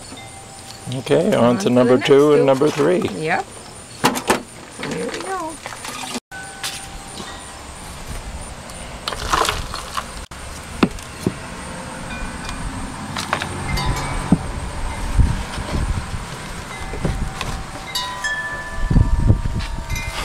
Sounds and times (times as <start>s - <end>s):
Wind chime: 0.0s - 2.0s, 6.3s - 9.0s, 12.0s - 12.9s, 13.6s - 15.2s, 16.6s - 20.2s.